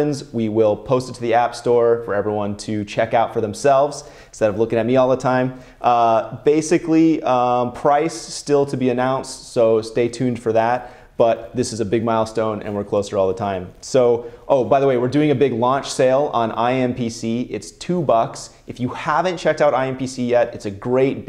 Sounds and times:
Speech: 0.0 - 21.2.

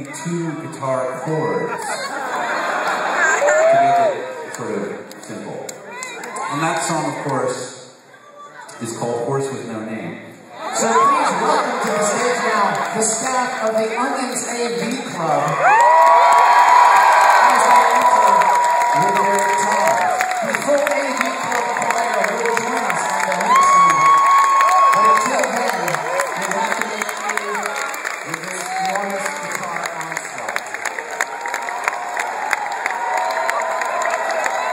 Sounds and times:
Speech: 0.0 - 1.9, 3.7 - 5.7, 8.7 - 15.6, 17.3 - 24.2, 24.9 - 30.6.

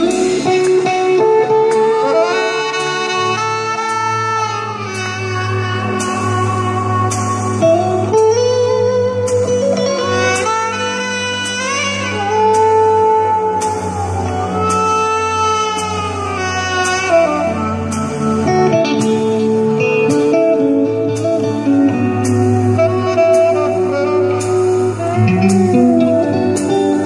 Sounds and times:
Saxophone: 0.0 - 27.0.

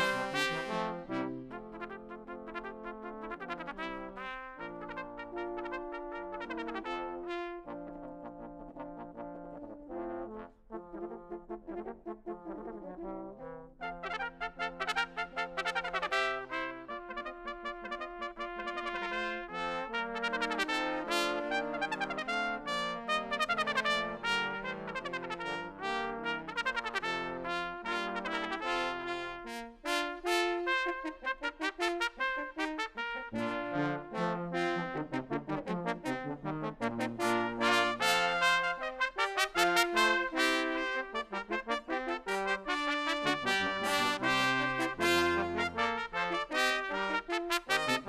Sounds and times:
Jazz: 0.0 - 48.0
Orchestra: 0.0 - 48.0
Trombone: 0.0 - 48.0
Trumpet: 0.0 - 48.0.

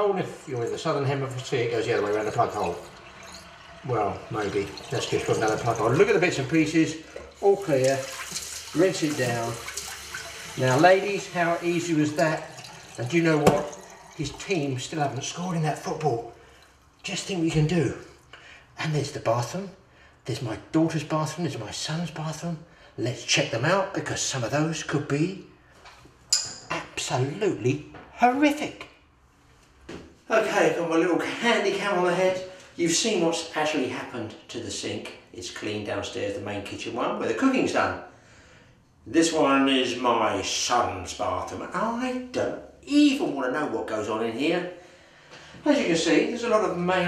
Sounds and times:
Sink (filling or washing): 0.5 - 18.3
Water tap, faucet: 0.7 - 18.3
Water: 1.3 - 18.3.

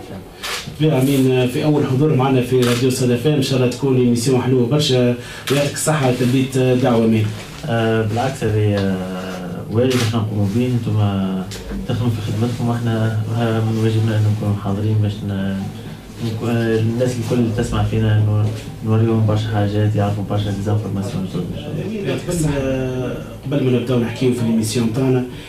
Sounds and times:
Speech: 0.0 - 25.4.

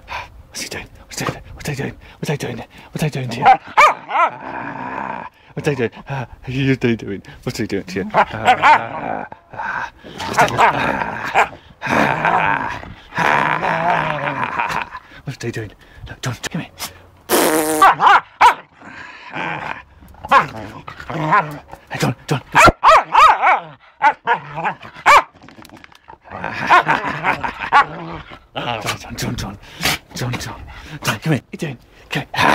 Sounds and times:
Speech: 0.6 - 3.6, 5.6 - 8.4, 15.2 - 16.7, 21.3 - 22.6, 28.6 - 32.5
Bow-wow: 3.4 - 4.4, 8.4 - 9.0, 17.8 - 18.7, 20.3 - 20.6, 22.6 - 25.4.

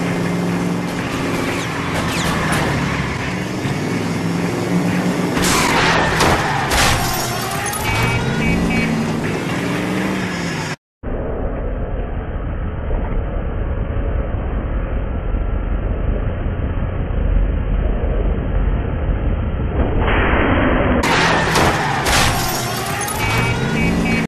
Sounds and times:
Car: 0.0 - 24.2.

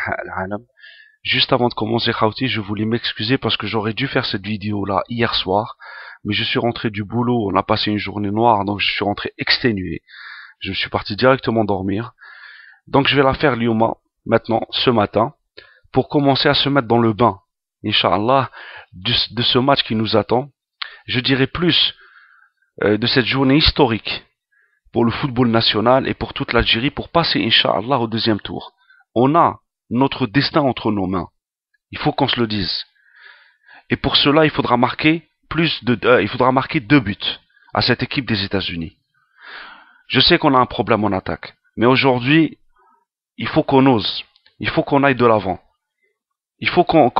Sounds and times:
Speech: 0.0 - 12.2, 12.9 - 22.0, 22.8 - 24.3, 24.9 - 33.0, 33.9 - 39.0, 40.1 - 42.6, 43.4 - 45.7, 46.6 - 47.1.

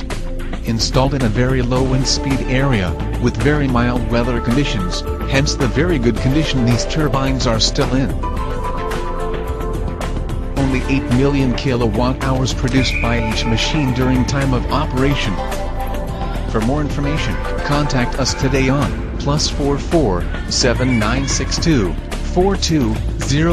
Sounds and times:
Music: 0.0 - 23.5
Speech: 0.6 - 8.2, 10.6 - 15.4, 16.5 - 23.5.

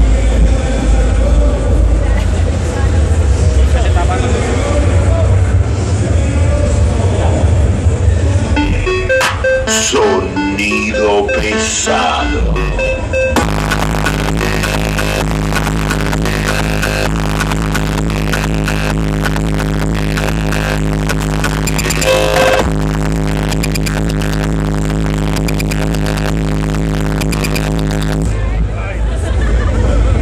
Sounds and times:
Music: 8.5 - 28.3.

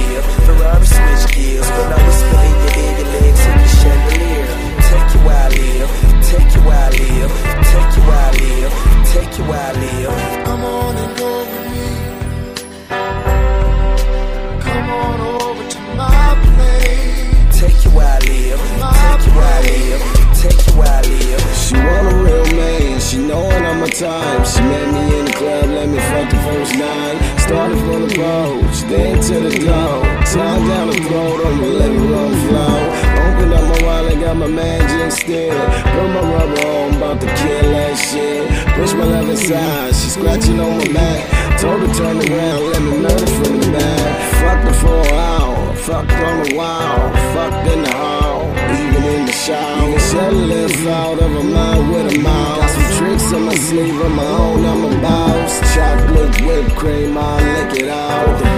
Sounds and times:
Soundtrack music: 0.0 - 58.5.

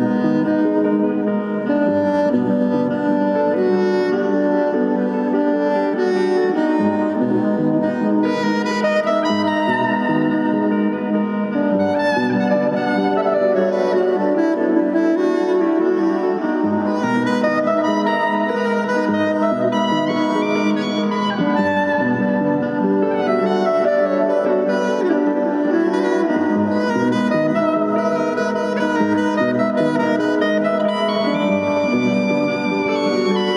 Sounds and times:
Brass instrument: 0.0 - 33.5.

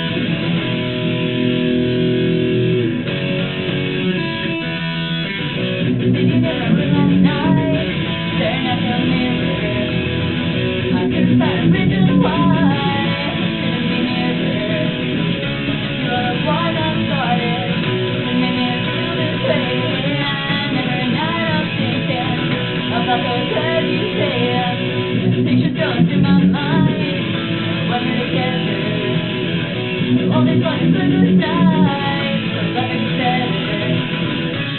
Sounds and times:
Strum: 0.0 - 34.7.

